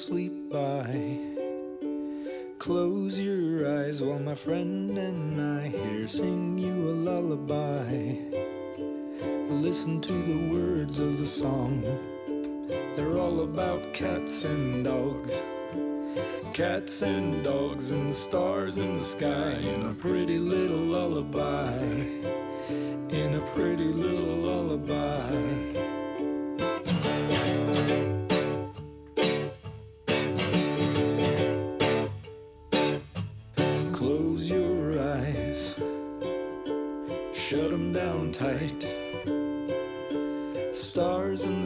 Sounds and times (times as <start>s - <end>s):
Lullaby: 0.0s - 29.6s, 33.6s - 41.6s.